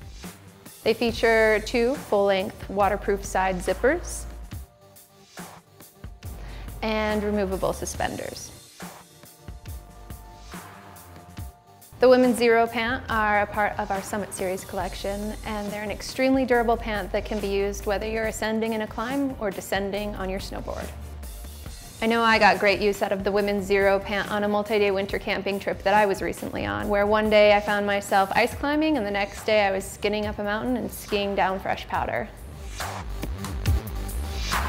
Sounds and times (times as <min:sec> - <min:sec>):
Music: 0:00.0 - 0:34.6
Speech: 0:00.9 - 0:04.2, 0:06.8 - 0:08.5, 0:12.0 - 0:20.9, 0:22.0 - 0:32.4.